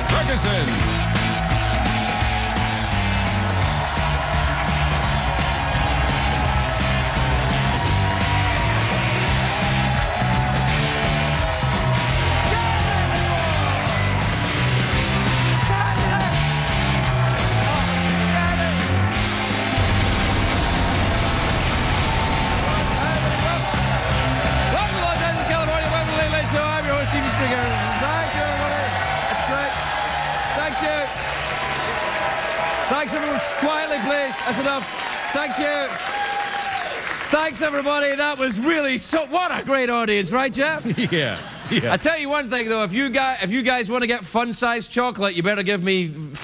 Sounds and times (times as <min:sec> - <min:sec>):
Music: 0:00.0 - 0:36.8.